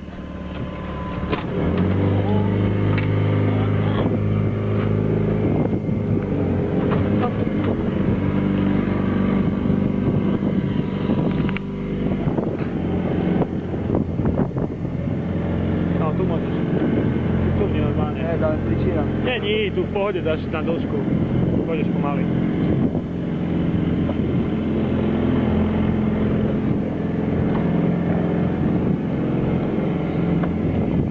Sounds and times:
Motorboat, speedboat: 0.0s - 31.1s.

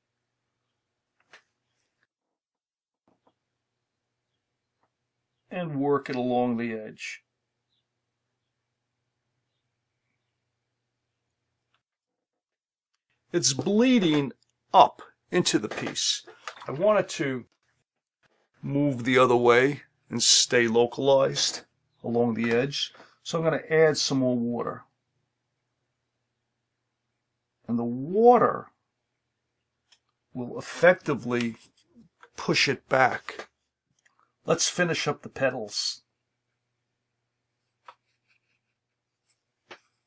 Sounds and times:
Narration, monologue: 4.4s - 9.3s, 11.3s - 40.0s.

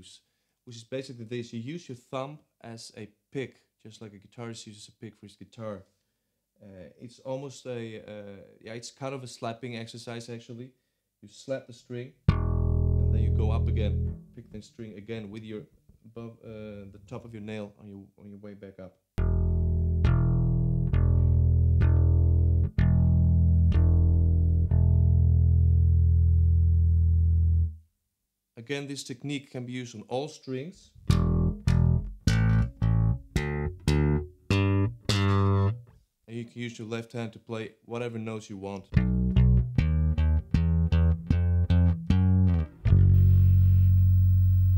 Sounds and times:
Speech: 0.0s - 5.9s, 6.6s - 12.2s, 13.0s - 19.0s, 28.6s - 31.0s, 36.3s - 39.0s
Bass guitar: 12.3s - 14.6s, 19.2s - 27.8s, 30.9s - 36.0s, 38.9s - 44.7s.

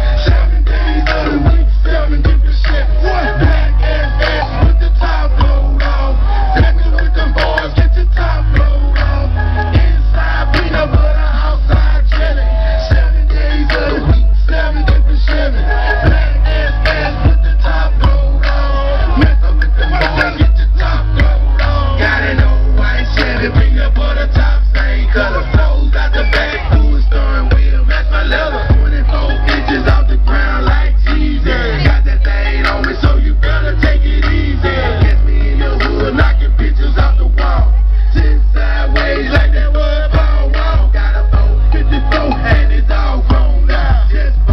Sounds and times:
Music: 0.0s - 44.5s.

